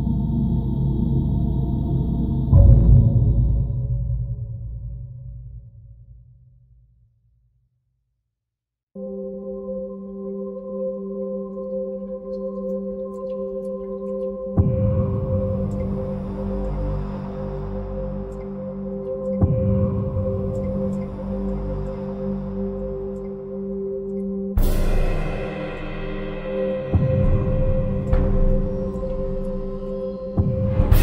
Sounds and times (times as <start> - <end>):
Singing bowl: 9.0 - 31.0.